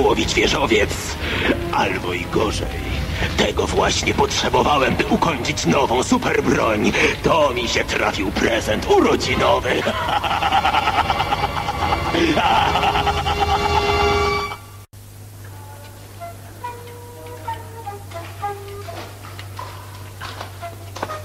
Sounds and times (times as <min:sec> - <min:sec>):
Music: 0:00.0 - 0:06.1, 0:10.5 - 0:21.2
Speech: 0:00.0 - 0:09.9.